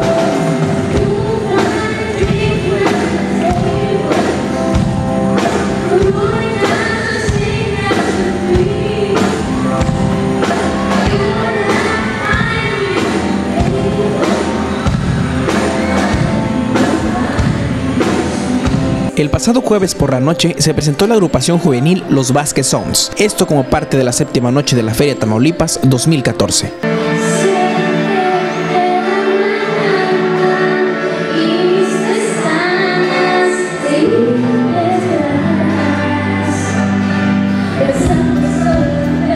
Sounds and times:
Music: 0.0s - 39.3s
Speech: 19.1s - 26.9s.

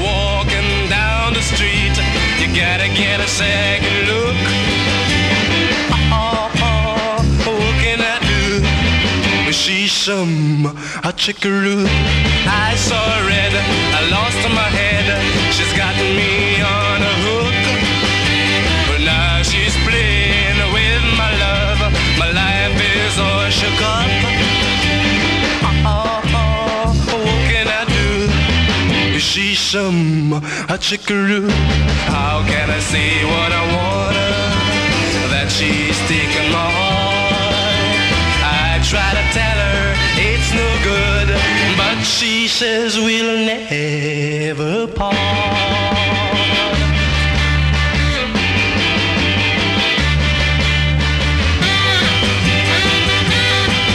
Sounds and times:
Music: 0.0s - 53.9s.

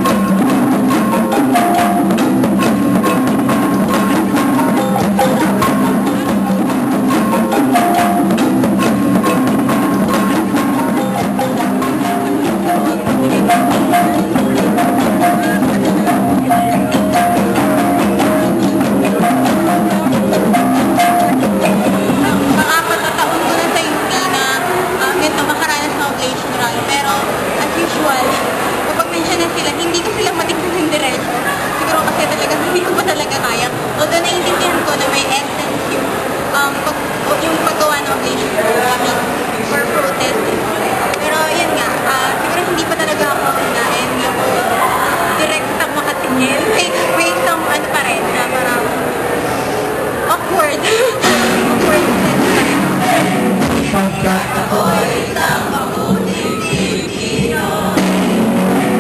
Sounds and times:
Speech: 21.8s - 49.0s.

